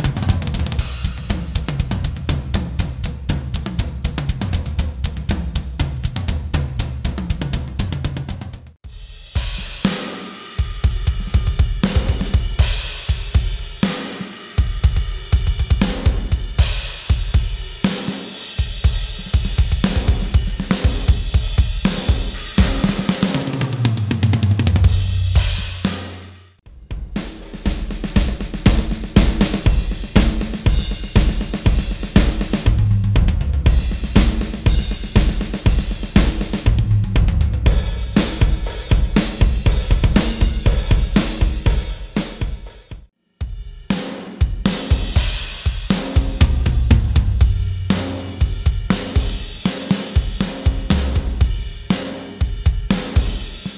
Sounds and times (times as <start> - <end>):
Bass drum: 0.0 - 9.8, 18.6 - 43.9, 44.5 - 49.4, 50.4 - 51.9
Drum kit: 0.0 - 53.7.